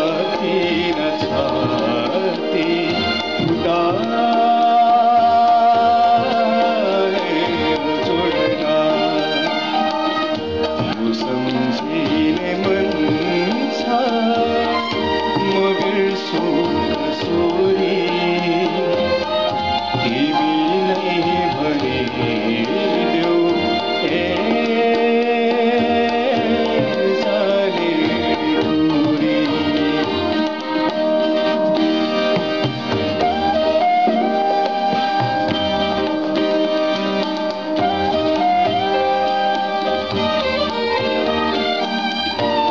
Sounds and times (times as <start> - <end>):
Singing: 0.0 - 10.0, 20.0 - 30.7
Music: 0.0 - 42.7.